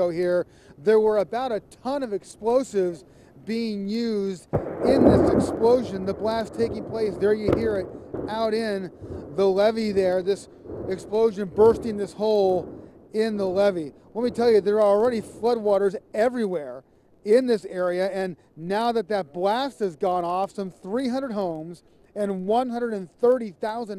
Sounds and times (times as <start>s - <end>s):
Speech: 0.0s - 23.9s
Explosion: 4.5s - 15.3s.